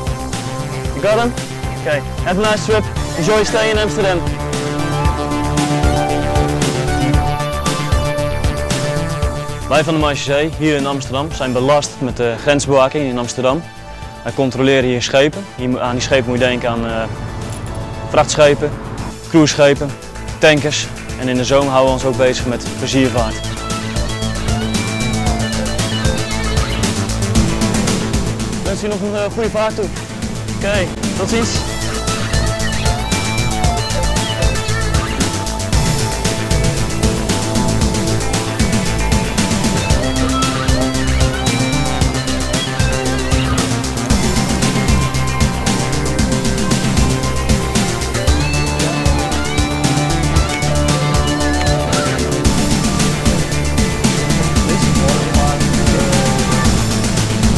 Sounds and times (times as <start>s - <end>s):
Music: 0.0s - 57.5s
Speech: 1.0s - 4.3s, 9.7s - 13.6s, 14.2s - 17.1s, 18.1s - 23.4s, 28.6s - 30.0s, 30.6s - 31.7s, 54.7s - 56.6s.